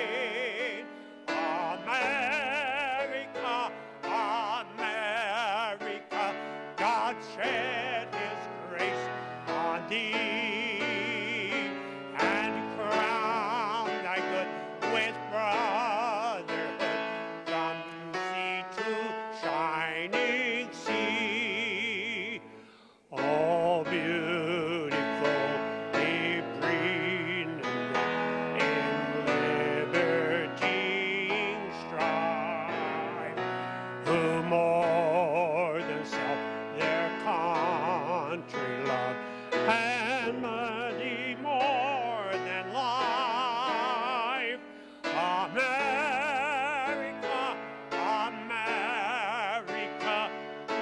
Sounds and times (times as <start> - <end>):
Music: 0.0 - 50.8.